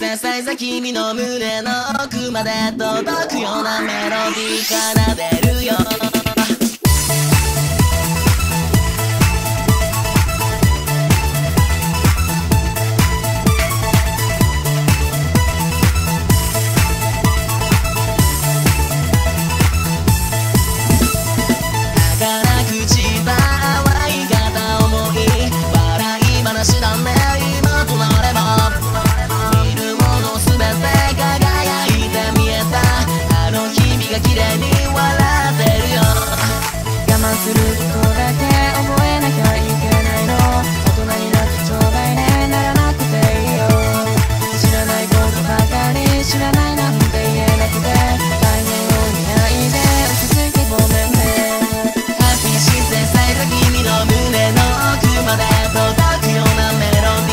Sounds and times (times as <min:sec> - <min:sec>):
Sampler: 0:26.8 - 0:57.2.